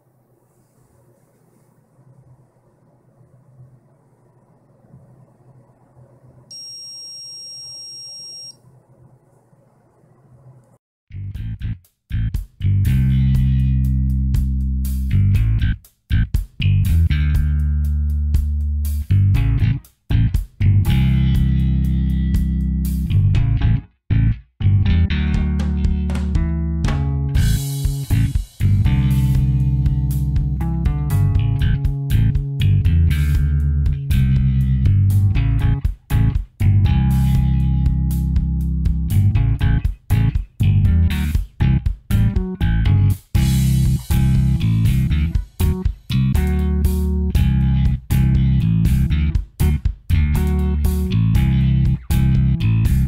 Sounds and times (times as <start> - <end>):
Smoke detector, smoke alarm: 6.5 - 8.6.